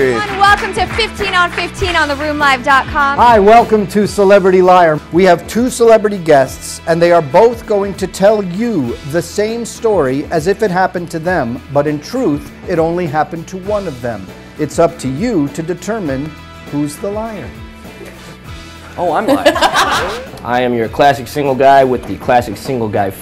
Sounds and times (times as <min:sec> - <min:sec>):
Music: 0:00.0 - 0:23.2.